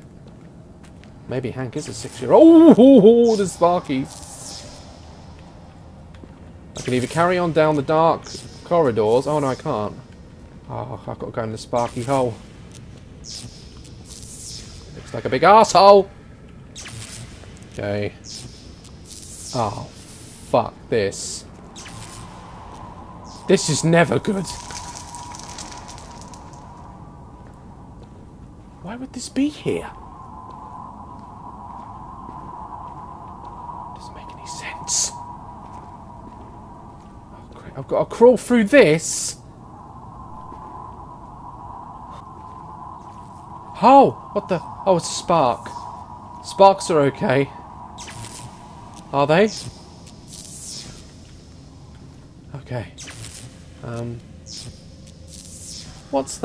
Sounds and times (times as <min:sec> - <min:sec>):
Speech: 0:01.3 - 0:04.1, 0:06.8 - 0:10.0, 0:10.7 - 0:12.4, 0:15.0 - 0:16.1, 0:17.8 - 0:18.2, 0:19.6 - 0:19.9, 0:20.5 - 0:21.4, 0:23.5 - 0:24.6, 0:28.8 - 0:30.0, 0:34.0 - 0:35.2, 0:37.4 - 0:39.4, 0:43.8 - 0:45.8, 0:46.4 - 0:47.6, 0:49.1 - 0:49.6, 0:52.5 - 0:52.9, 0:53.8 - 0:54.2, 0:56.1 - 0:56.4.